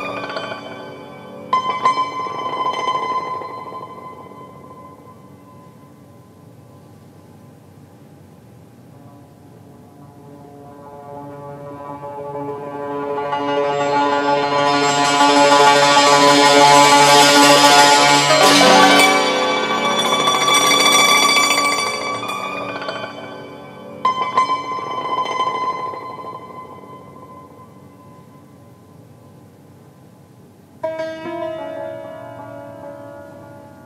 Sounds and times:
Inside, large room or hall: 8.8 - 29.4
Musical instrument: 10.9 - 27.4.

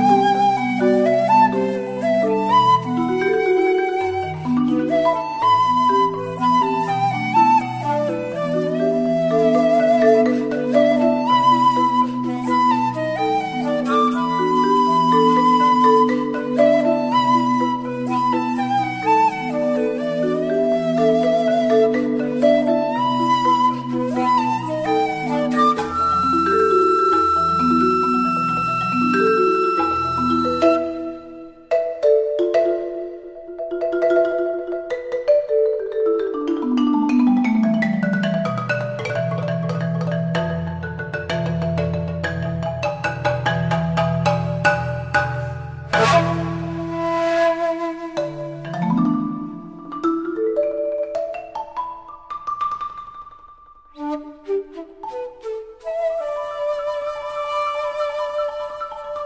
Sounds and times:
Marimba, xylophone: 0.0 - 59.2.

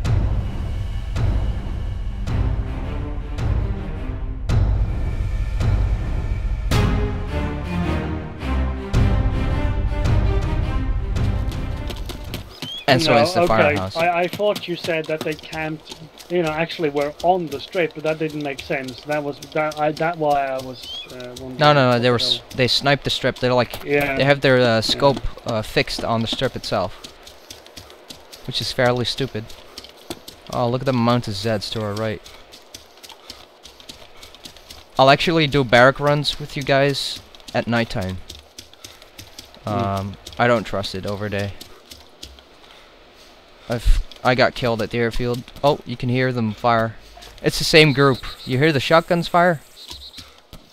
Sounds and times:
Speech: 12.9 - 26.9, 28.5 - 29.5, 30.5 - 32.3, 35.0 - 38.2, 39.7 - 41.6, 43.7 - 49.7.

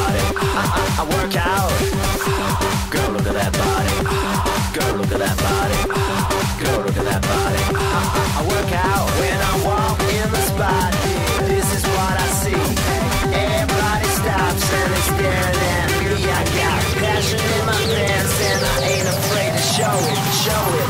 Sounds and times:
Music: 0.0 - 20.9.

